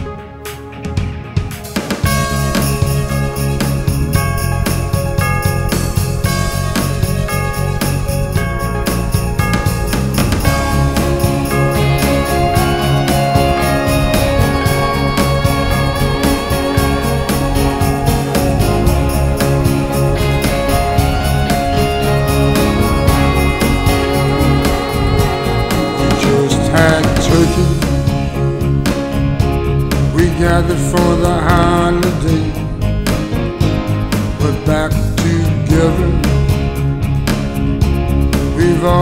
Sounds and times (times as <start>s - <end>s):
Music: 0.0s - 39.0s.